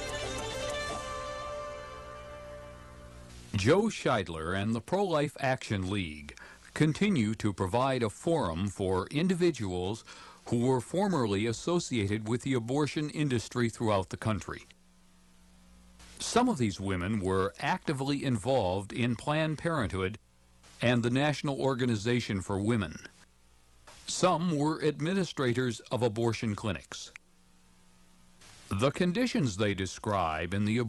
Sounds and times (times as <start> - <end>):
Speech: 3.5 - 14.8, 16.2 - 20.2, 20.8 - 23.2, 24.1 - 27.2, 28.7 - 30.8.